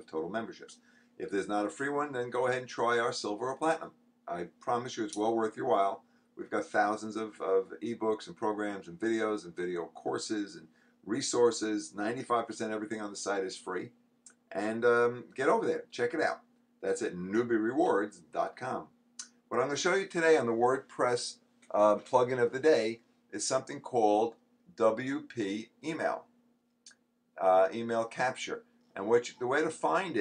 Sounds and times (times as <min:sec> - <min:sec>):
Speech: 0:00.0 - 0:26.3, 0:27.4 - 0:30.2.